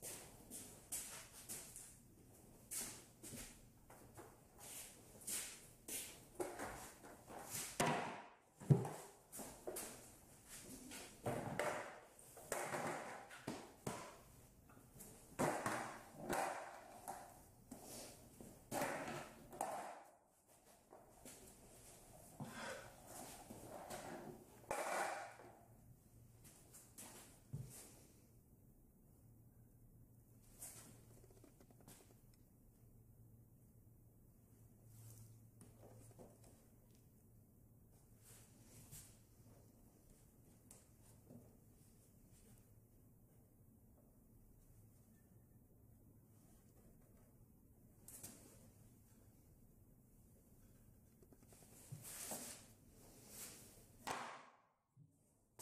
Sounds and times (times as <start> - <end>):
Skateboard: 15.4 - 17.3, 18.8 - 20.1, 23.6 - 25.6.